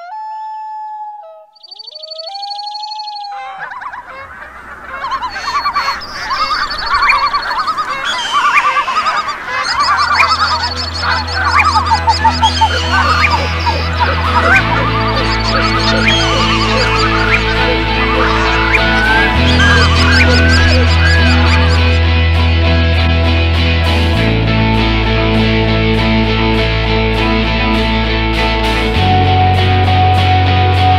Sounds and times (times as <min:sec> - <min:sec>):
Gobble: 0:03.3 - 0:22.0.